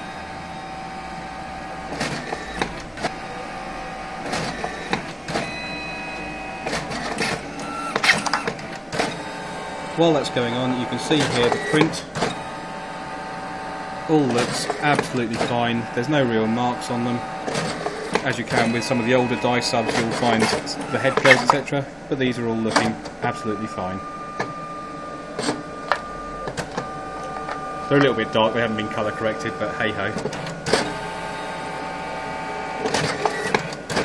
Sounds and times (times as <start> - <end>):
Speech: 10.0 - 12.1, 14.1 - 17.3, 18.2 - 24.0, 27.9 - 30.2.